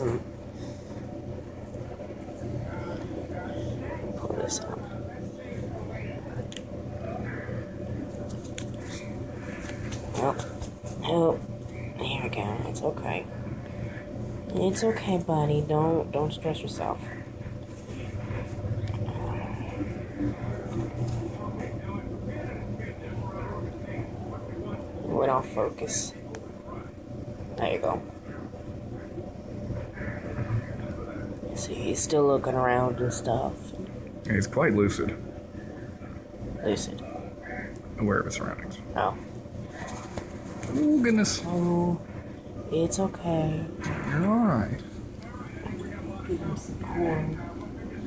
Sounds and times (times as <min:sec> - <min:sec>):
Speech: 0:02.4 - 0:07.6, 0:10.1 - 0:13.9, 0:14.5 - 0:17.3, 0:42.7 - 0:48.0.